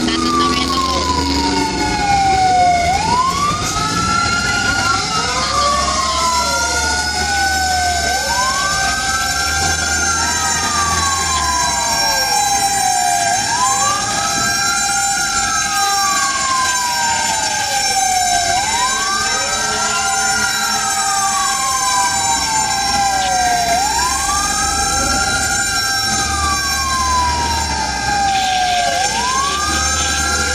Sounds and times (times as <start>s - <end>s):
Fire engine, fire truck (siren): 0.0s - 30.5s
Truck: 0.0s - 30.5s.